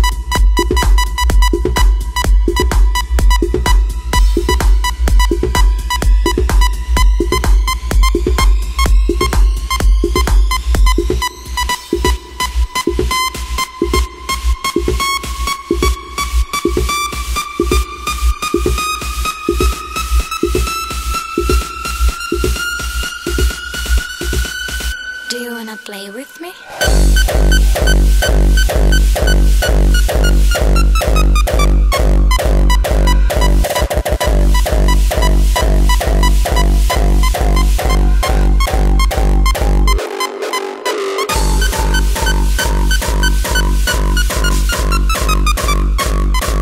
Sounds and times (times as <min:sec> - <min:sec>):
Electronic dance music: 0:00.0 - 0:46.6.